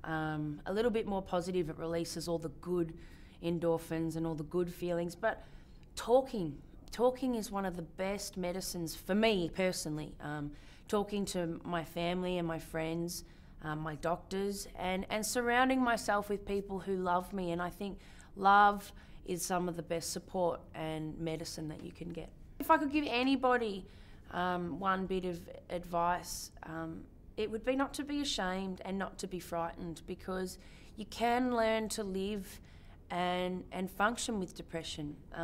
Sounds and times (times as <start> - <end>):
Speech: 0.0 - 5.4, 6.0 - 35.4
Inside, small room: 0.0 - 35.4.